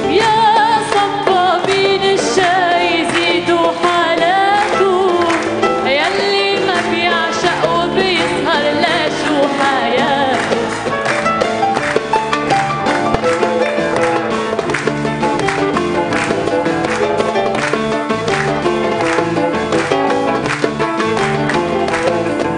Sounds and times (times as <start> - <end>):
Music: 0.0 - 22.5.